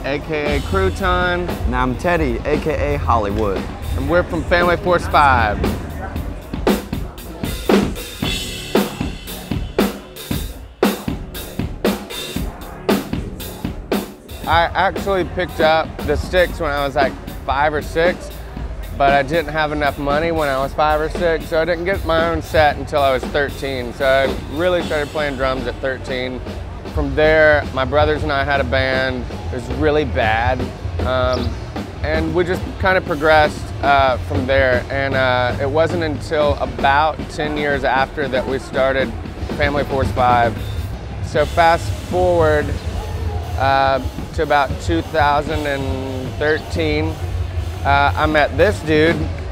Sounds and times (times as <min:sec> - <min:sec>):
Speech: 0:00.0 - 0:06.2, 0:14.4 - 0:18.4, 0:19.0 - 0:26.4, 0:27.0 - 0:40.6, 0:41.3 - 0:42.8, 0:43.6 - 0:47.2, 0:47.9 - 0:49.3
Music: 0:00.0 - 0:49.5.